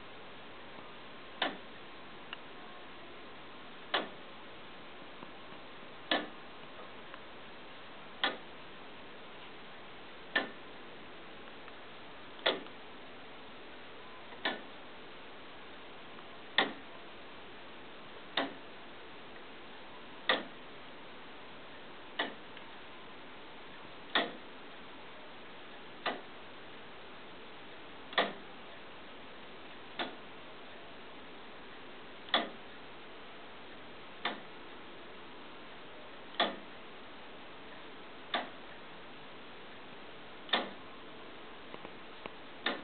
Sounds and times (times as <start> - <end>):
Tick-tock: 1.4 - 1.6, 3.9 - 4.2, 6.1 - 6.4, 8.2 - 8.4, 10.3 - 10.6, 12.4 - 12.8, 14.3 - 14.7, 16.6 - 16.9, 18.4 - 18.6, 20.3 - 20.6, 22.2 - 22.7, 24.1 - 24.5, 26.0 - 26.3, 28.1 - 28.5, 29.7 - 30.3, 32.3 - 32.7, 34.2 - 34.6, 36.3 - 36.8, 37.7 - 38.8, 40.5 - 40.8, 41.8 - 42.8.